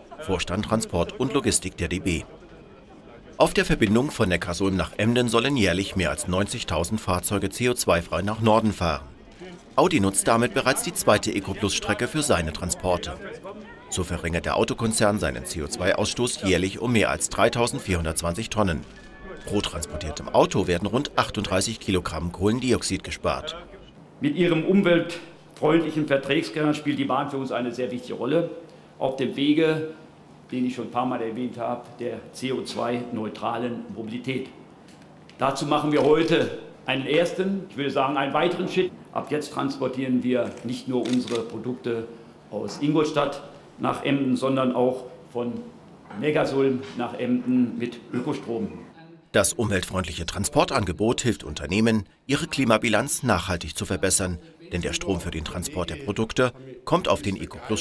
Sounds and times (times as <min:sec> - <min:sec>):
Speech: 0:00.0 - 0:34.6, 0:35.4 - 0:57.8.